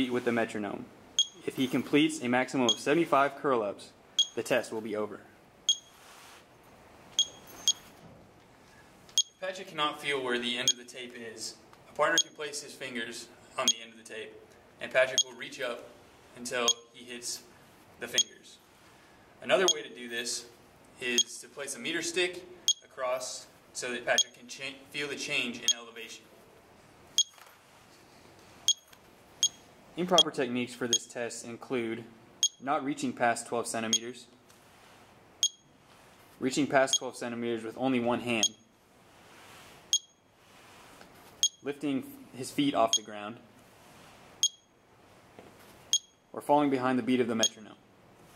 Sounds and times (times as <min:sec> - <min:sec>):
Speech: 0:00.0 - 0:05.4, 0:09.4 - 0:18.6, 0:19.4 - 0:26.3, 0:30.0 - 0:34.4, 0:36.4 - 0:38.6, 0:41.6 - 0:43.5, 0:46.4 - 0:47.8.